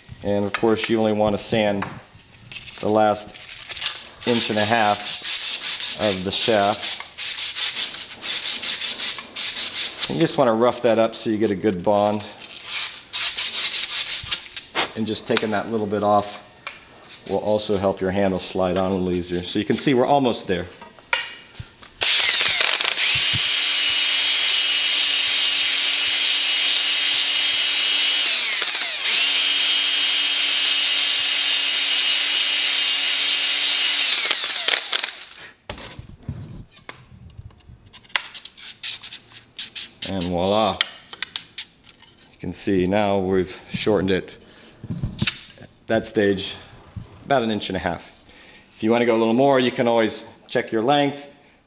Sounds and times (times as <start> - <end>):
Drill: 22.0 - 35.4.